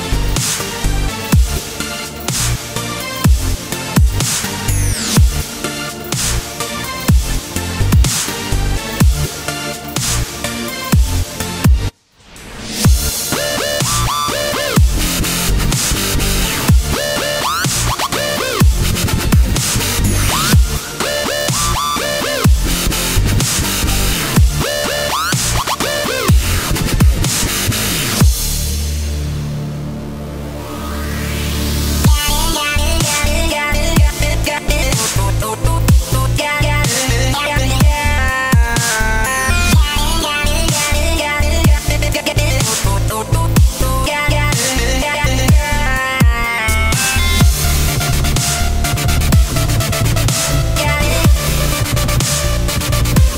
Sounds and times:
Dubstep: 0:00.0 - 0:53.3.

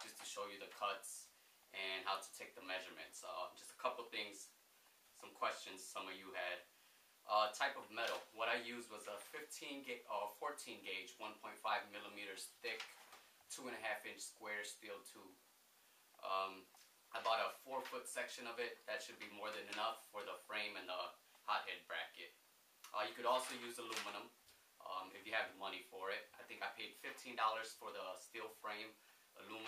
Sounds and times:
Speech: 0:00.0 - 0:04.6, 0:05.2 - 0:06.7, 0:07.3 - 0:15.4, 0:16.2 - 0:29.6.

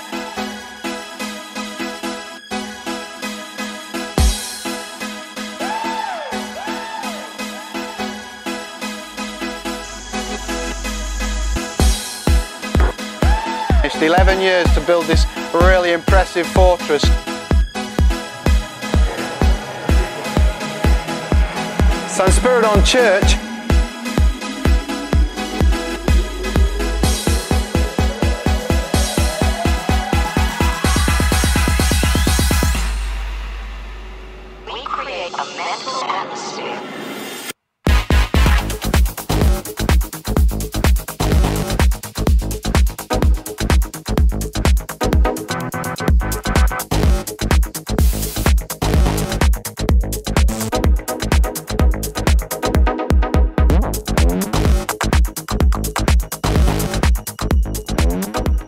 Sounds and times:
Electronica: 0:00.0 - 0:58.6.

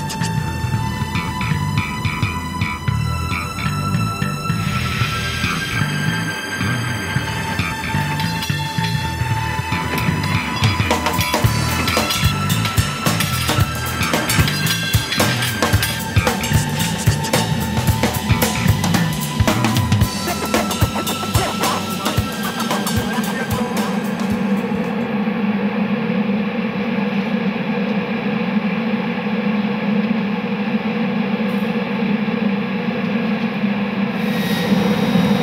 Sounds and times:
Fixed-wing aircraft, airplane: 0:24.8 - 0:35.4.

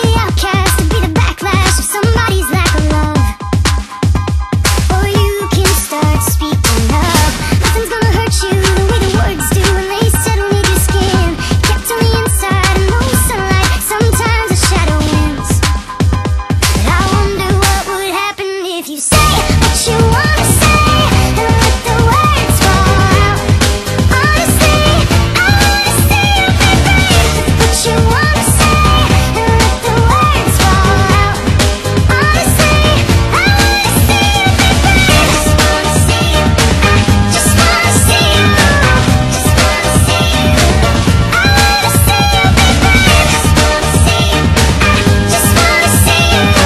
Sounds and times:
Electronica: 0:00.0 - 0:18.3, 0:19.1 - 0:46.6.

